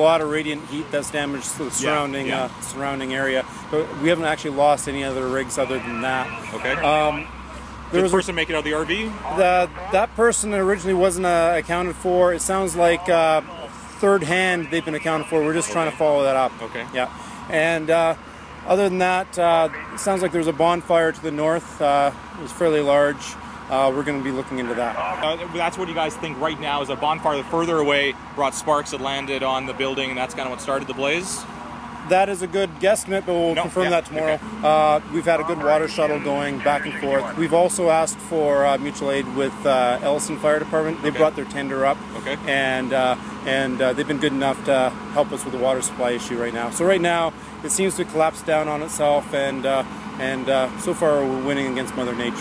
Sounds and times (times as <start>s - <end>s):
Speech: 0.0s - 31.5s, 32.1s - 52.4s.